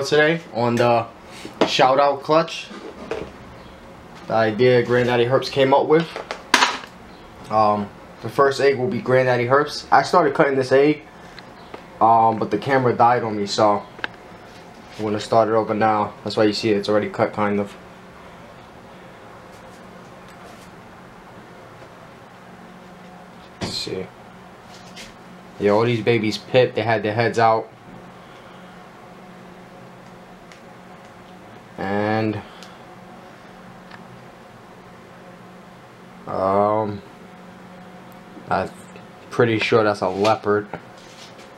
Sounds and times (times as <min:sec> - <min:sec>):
Speech: 0:00.0 - 0:02.7, 0:04.3 - 0:06.2, 0:07.5 - 0:11.0, 0:12.0 - 0:13.9, 0:15.0 - 0:17.8, 0:23.6 - 0:24.1, 0:25.6 - 0:27.7, 0:31.8 - 0:32.5, 0:36.3 - 0:37.1, 0:38.5 - 0:40.8.